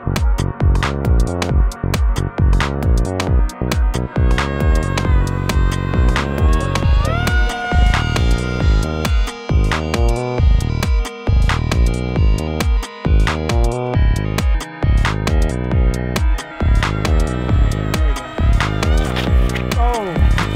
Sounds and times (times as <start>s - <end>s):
Synthesizer: 0.0s - 20.5s.